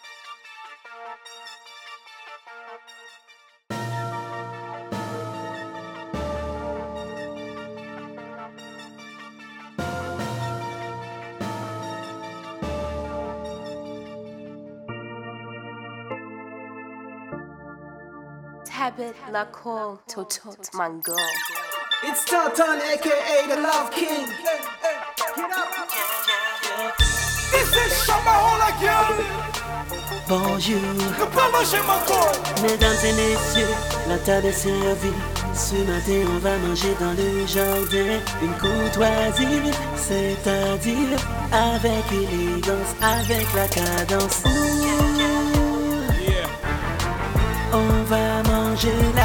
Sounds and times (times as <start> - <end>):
Music: 0.0 - 19.7, 21.0 - 49.2
Speech: 18.7 - 21.3, 30.4 - 33.6.